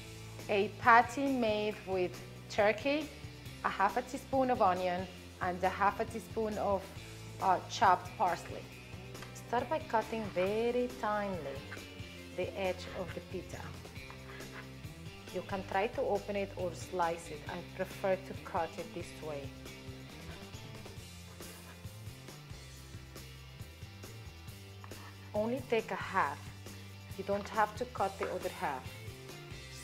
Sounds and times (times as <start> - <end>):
Music: 0.0 - 29.8
Speech: 0.5 - 3.1, 3.7 - 6.8, 7.4 - 8.6, 9.5 - 11.6, 12.4 - 13.8, 15.3 - 19.5, 25.4 - 26.4, 27.2 - 28.9.